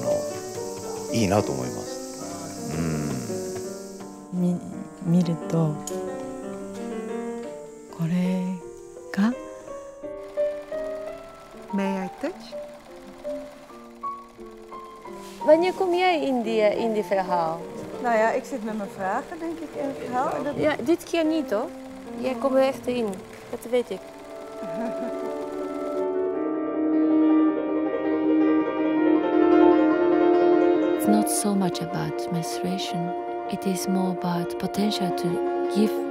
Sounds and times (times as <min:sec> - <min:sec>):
Music: 0:00.0 - 0:36.1.